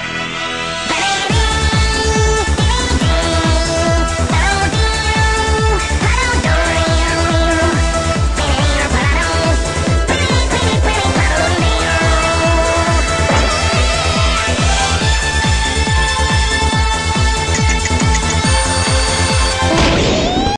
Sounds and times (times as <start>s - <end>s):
Music: 0.0s - 20.5s.